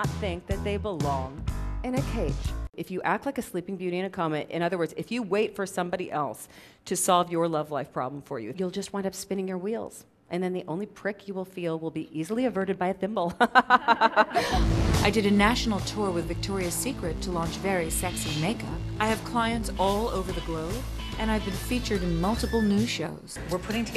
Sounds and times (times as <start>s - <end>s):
Music: 0.0s - 2.7s, 14.5s - 23.9s
Speech: 0.0s - 13.3s, 15.1s - 23.9s.